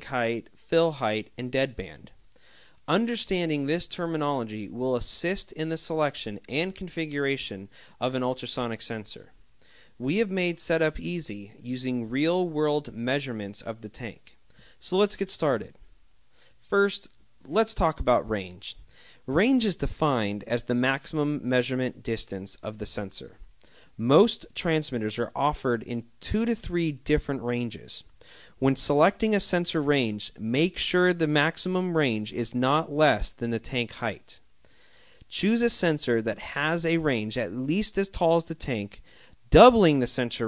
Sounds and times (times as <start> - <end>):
Speech: 0.0 - 2.2, 2.9 - 9.4, 10.0 - 15.9, 16.6 - 23.4, 24.0 - 34.5, 35.3 - 40.4.